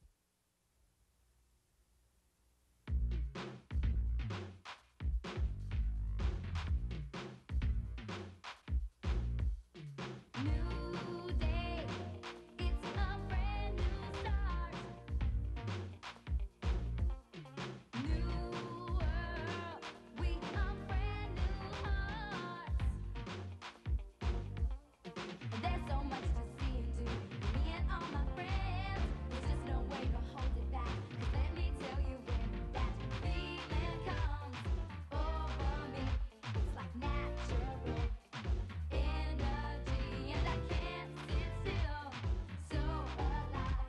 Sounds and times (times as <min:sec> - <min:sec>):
Music: 0:02.9 - 0:43.8.